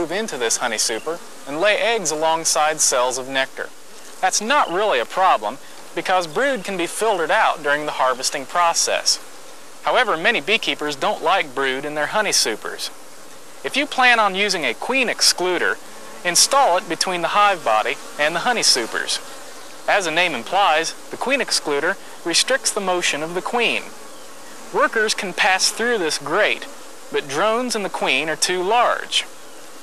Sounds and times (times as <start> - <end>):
Bee, wasp, etc.: 0.0 - 29.8
Fly, housefly: 0.0 - 29.8.